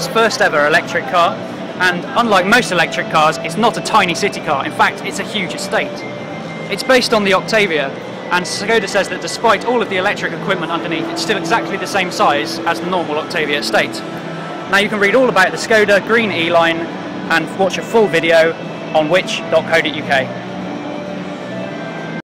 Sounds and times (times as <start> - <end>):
Speech: 0.0 - 6.0, 6.7 - 14.0, 14.7 - 20.3
Music: 0.0 - 22.2.